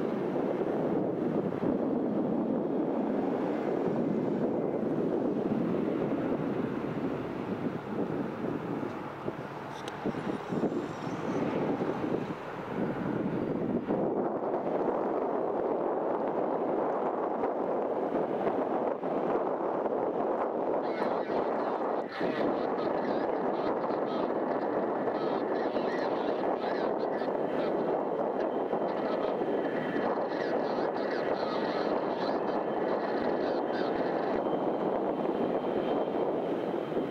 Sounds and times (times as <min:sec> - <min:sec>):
Vehicle: 0:00.0 - 0:37.1
Speech: 0:20.8 - 0:27.8, 0:28.9 - 0:29.4, 0:30.0 - 0:34.4.